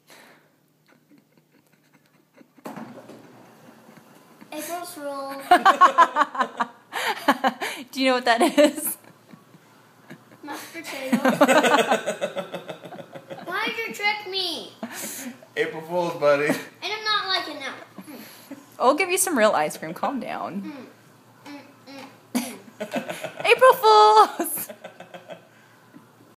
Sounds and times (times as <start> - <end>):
Child speech, kid speaking: 4.5 - 5.6, 10.4 - 11.4, 13.4 - 14.8, 16.8 - 17.9, 20.6 - 20.9.